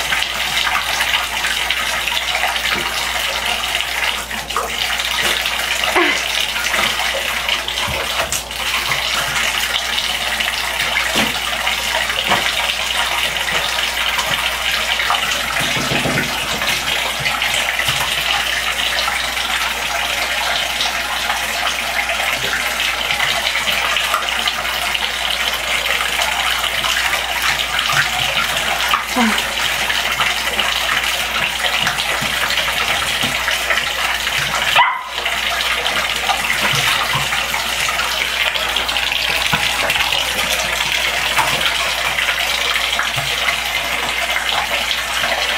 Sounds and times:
Bathtub (filling or washing): 0.0 - 45.5
Fill (with liquid): 0.0 - 45.5
Speech: 29.1 - 29.5.

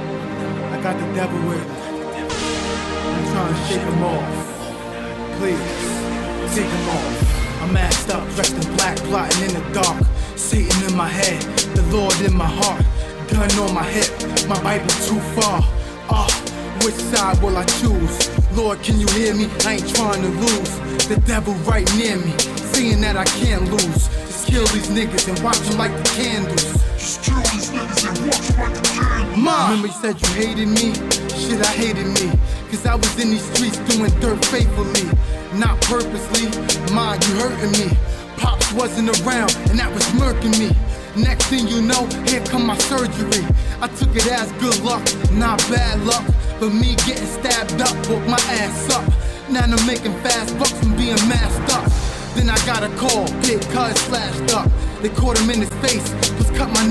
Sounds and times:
Hip hop music: 0.0 - 56.9.

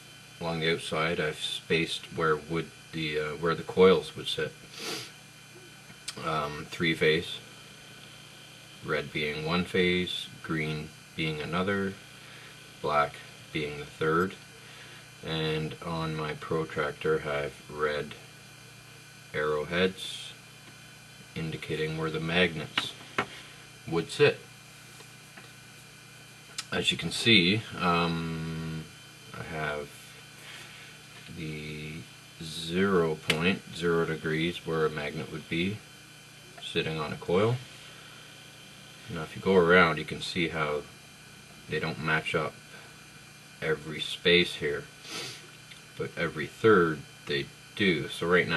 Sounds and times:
Speech: 0.4 - 4.6, 6.1 - 7.5, 8.8 - 12.0, 12.8 - 14.4, 15.2 - 18.2, 19.3 - 20.4, 21.4 - 23.0, 23.8 - 24.5, 26.6 - 30.0, 31.3 - 35.8, 36.6 - 37.7, 39.1 - 40.9, 41.7 - 42.6, 43.6 - 44.9, 46.0 - 48.5.

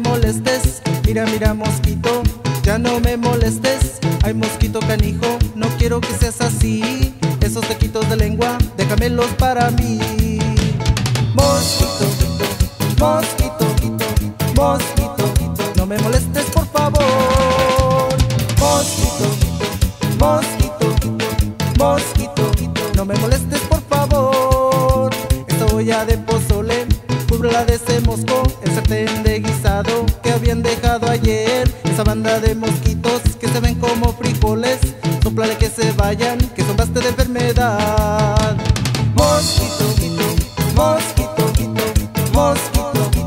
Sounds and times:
Music: 0.0 - 43.2.

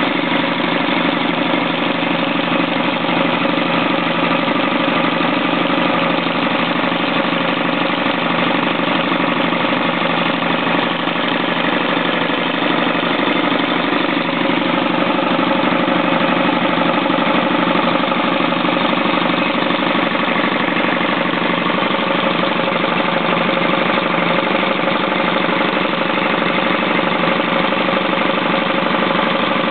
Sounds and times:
Idling: 0.0 - 29.7.

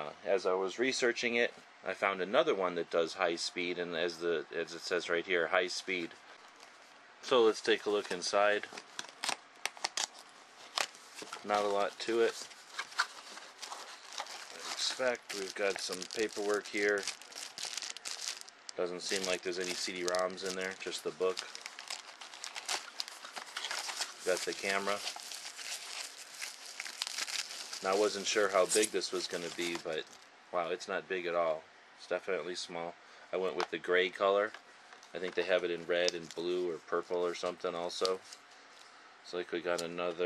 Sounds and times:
Speech: 0.0 - 6.2, 7.2 - 8.7, 11.4 - 12.4, 14.6 - 17.1, 18.8 - 21.5, 24.3 - 25.0, 27.8 - 38.2, 39.2 - 40.2
Inside, small room: 0.0 - 40.2
Crumpling, crinkling: 7.9 - 30.3, 36.0 - 36.6.

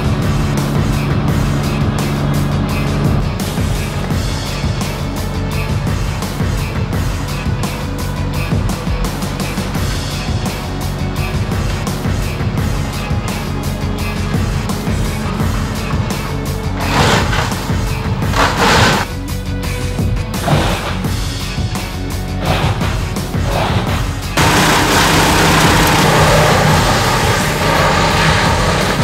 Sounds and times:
Music: 0.0 - 29.0
Outside, rural or natural: 0.0 - 29.0
Vehicle: 0.0 - 29.0.

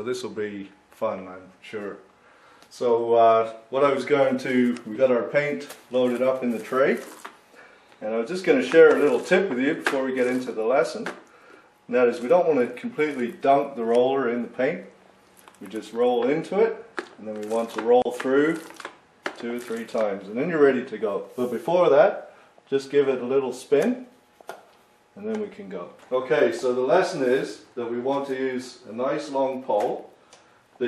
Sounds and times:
Speech: 0.0 - 2.1, 2.7 - 7.2, 8.0 - 11.2, 11.9 - 15.0, 15.6 - 24.2, 25.2 - 30.1.

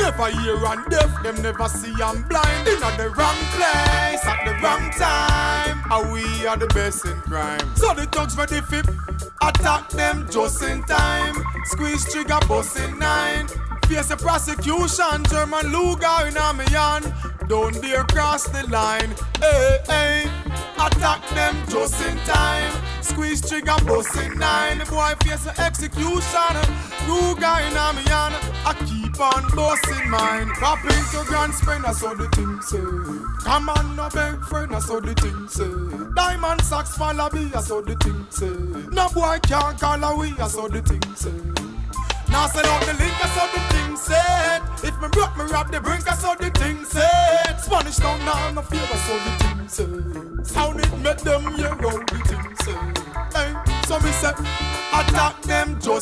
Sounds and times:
Reggae: 0.0 - 56.0.

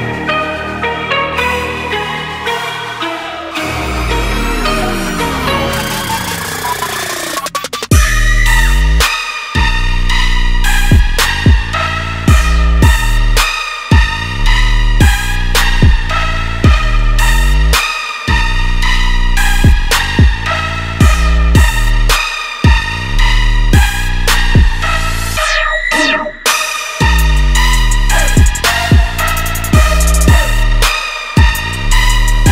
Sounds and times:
Music: 0.0 - 32.5.

